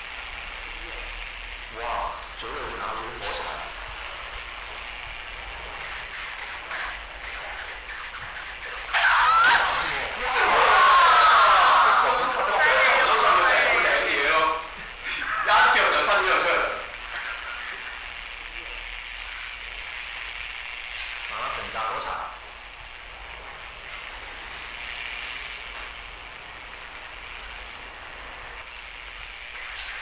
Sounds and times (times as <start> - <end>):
Speech: 0.6 - 3.8, 8.8 - 17.8, 21.3 - 22.4.